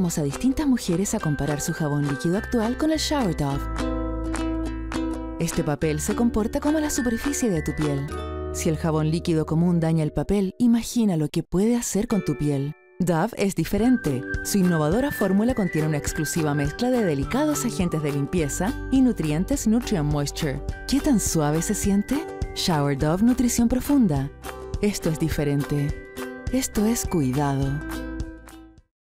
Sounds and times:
Speech: 0.0 - 3.7, 5.4 - 27.9
Music: 0.0 - 29.0.

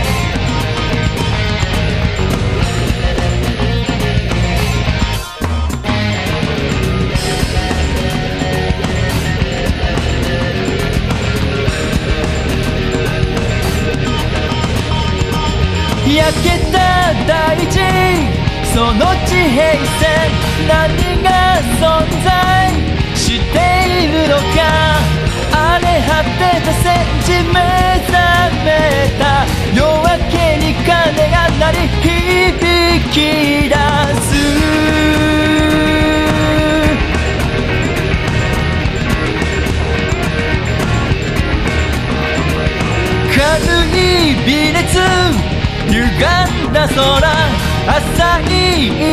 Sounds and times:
Music: 0.0 - 49.1.

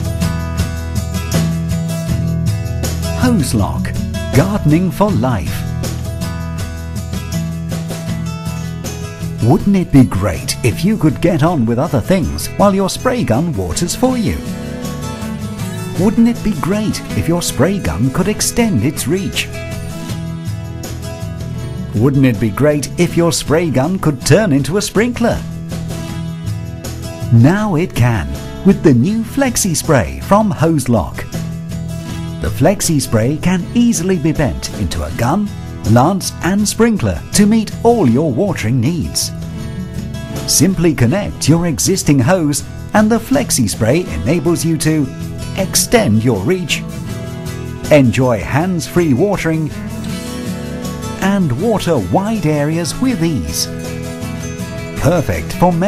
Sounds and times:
Music: 0.0 - 55.8
Speech: 3.2 - 5.7, 9.4 - 14.5, 16.0 - 19.7, 22.0 - 25.5, 27.3 - 31.3, 32.4 - 39.4, 40.5 - 46.9, 47.9 - 49.8, 51.2 - 53.8, 55.0 - 55.8.

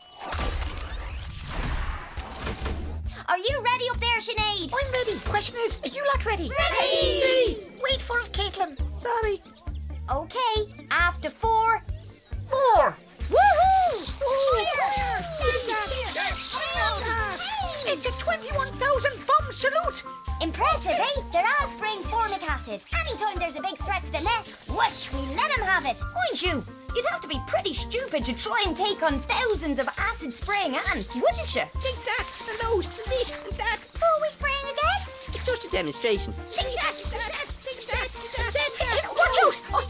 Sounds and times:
Music: 0.0 - 39.8
Speech: 14.3 - 39.8.

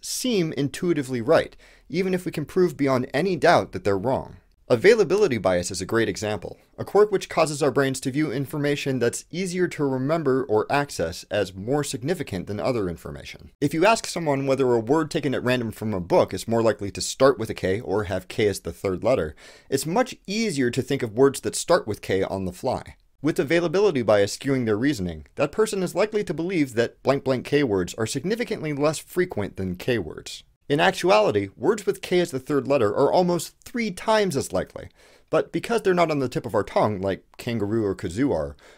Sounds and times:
Speech: 0.0 - 38.6.

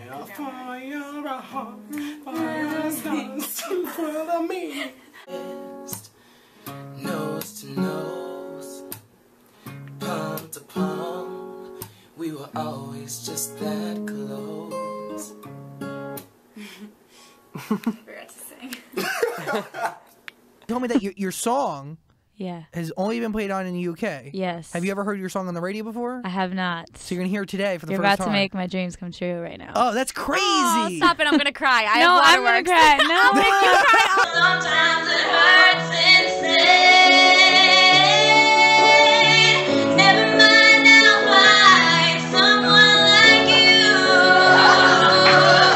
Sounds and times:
Singing: 0.0 - 5.0, 33.2 - 45.7
Music: 5.3 - 16.3, 34.3 - 45.7
Speech: 27.0 - 28.7, 29.4 - 34.3.

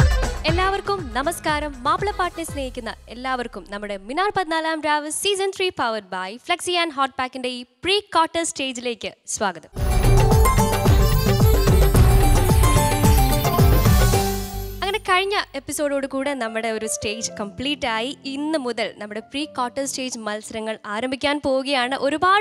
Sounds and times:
Music: 0.0 - 4.1, 9.8 - 22.3
Speech: 0.5 - 9.7, 14.8 - 22.4.

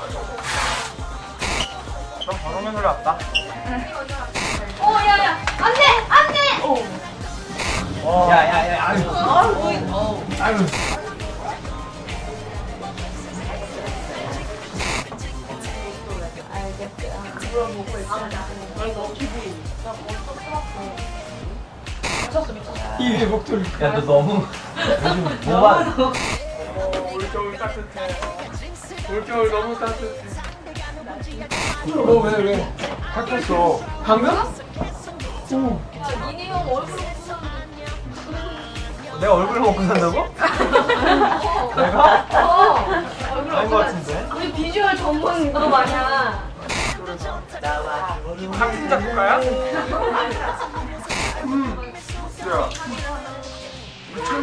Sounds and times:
Music: 0.0 - 54.4.

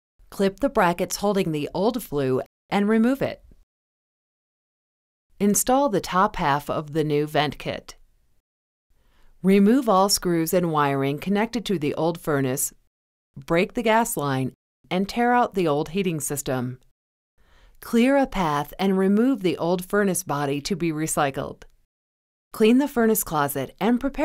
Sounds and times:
Speech: 0.4 - 3.4, 5.4 - 8.0, 9.4 - 12.8, 13.4 - 16.8, 17.8 - 21.7, 22.6 - 24.2.

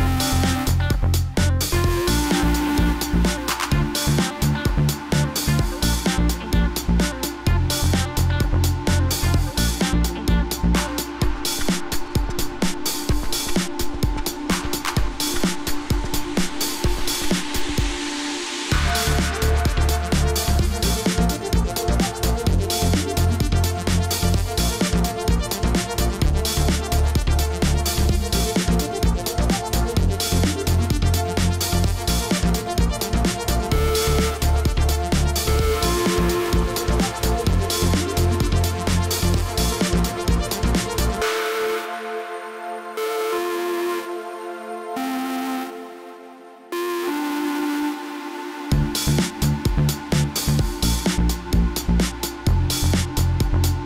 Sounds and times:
Music: 0.0 - 53.8.

